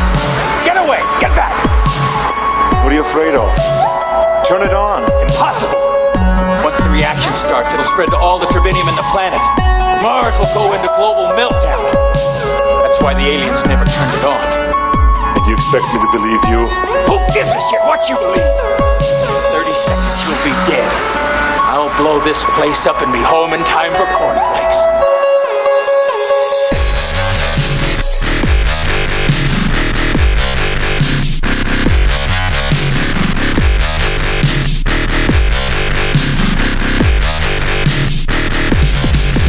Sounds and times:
Dubstep: 0.0 - 25.0, 26.4 - 39.4.

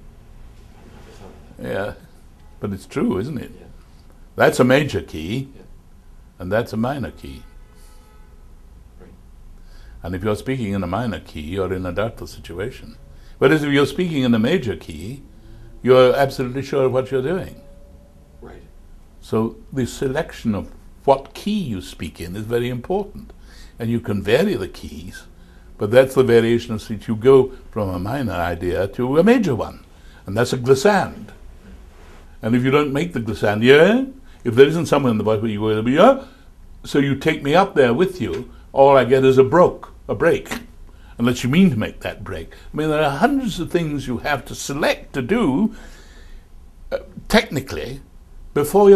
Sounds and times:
Narration, monologue: 0.0 - 48.9
Male speech, man speaking: 1.1 - 3.8, 4.4 - 5.7, 6.4 - 7.5, 10.0 - 15.2, 15.8 - 17.7, 18.4 - 31.4, 32.4 - 36.2, 36.9 - 45.7, 46.9 - 48.0, 48.6 - 48.9.

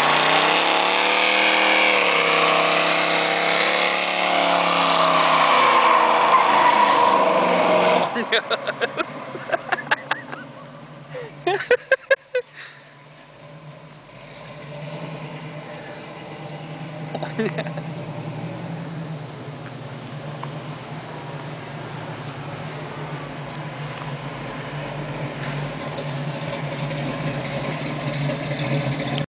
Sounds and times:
Car: 0.0 - 29.2.

